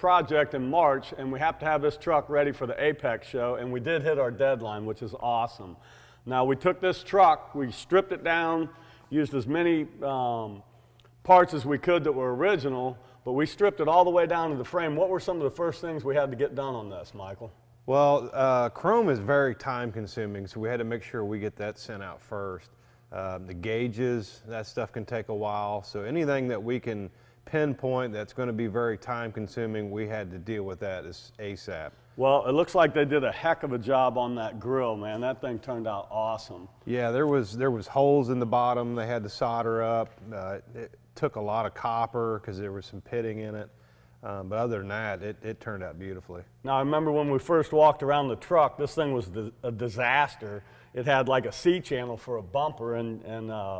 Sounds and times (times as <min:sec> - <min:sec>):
Speech: 0:00.0 - 0:10.6, 0:11.2 - 0:53.7.